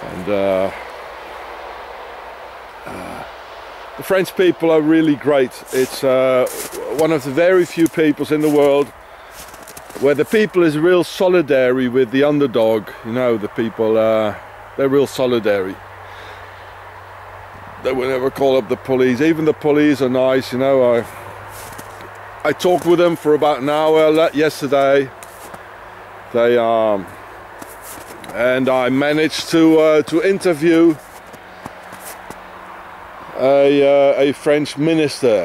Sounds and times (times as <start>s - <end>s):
Speech: 0.0s - 0.8s, 2.9s - 3.3s, 4.0s - 8.9s, 10.0s - 15.8s, 17.8s - 21.2s, 22.4s - 25.1s, 26.4s - 27.1s, 28.3s - 31.0s, 33.3s - 35.4s
Outside, rural or natural: 0.0s - 35.4s.